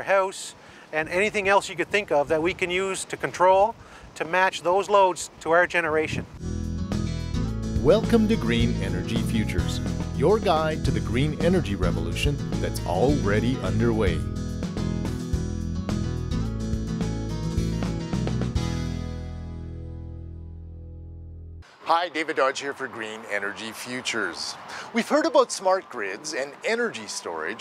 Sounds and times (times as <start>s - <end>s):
Speech: 0.0s - 6.3s, 7.8s - 14.2s, 21.9s - 27.6s
Music: 6.4s - 21.6s.